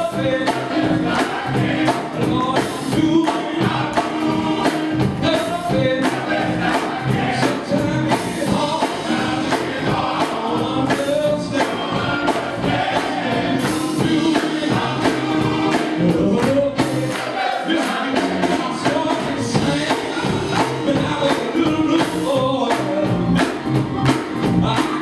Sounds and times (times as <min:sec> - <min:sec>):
Male singing: 0:00.0 - 0:00.8, 0:02.2 - 0:04.6, 0:05.2 - 0:06.3, 0:07.3 - 0:12.4, 0:14.0 - 0:17.0, 0:17.7 - 0:23.6, 0:24.6 - 0:25.0
Choir: 0:00.0 - 0:05.1, 0:05.7 - 0:22.2.